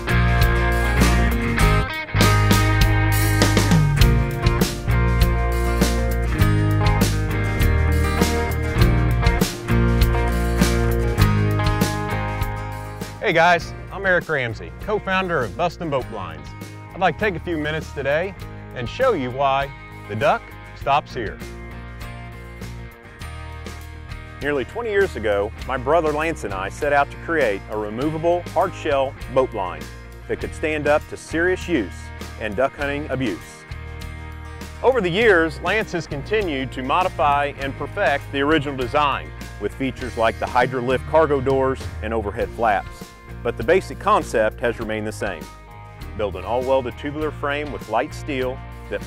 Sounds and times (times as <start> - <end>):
Music: 0.0 - 49.0
Speech: 13.2 - 21.4, 24.4 - 33.6, 34.8 - 45.5, 46.2 - 49.0.